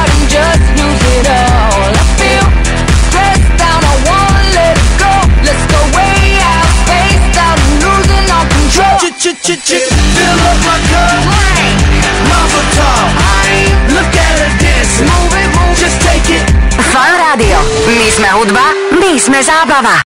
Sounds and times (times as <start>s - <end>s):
Music: 0.0s - 20.0s
Speech: 16.8s - 20.0s.